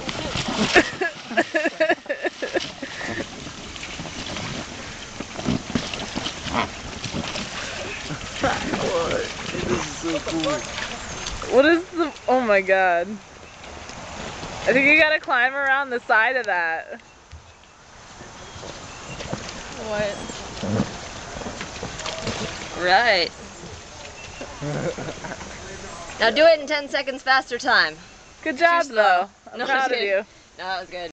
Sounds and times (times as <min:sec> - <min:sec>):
Stream: 0:00.0 - 0:31.1.